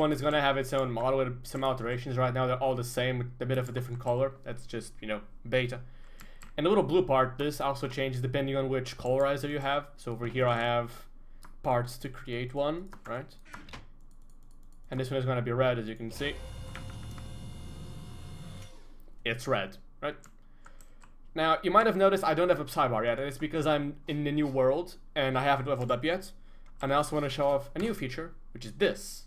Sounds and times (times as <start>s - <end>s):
Speech: 0.0s - 5.8s, 6.6s - 11.1s, 11.7s - 13.4s, 14.9s - 16.4s, 19.3s - 20.2s, 21.4s - 29.2s.